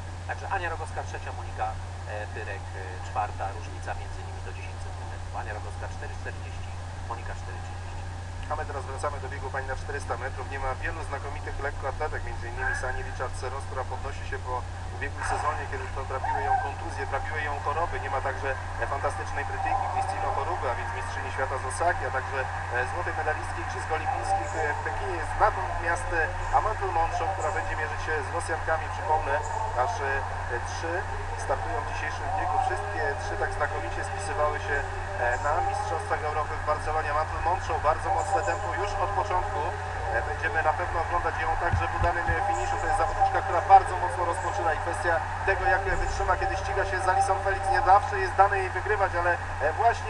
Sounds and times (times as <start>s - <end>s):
Outside, urban or manmade: 0.0s - 50.0s
Speech: 0.3s - 50.0s.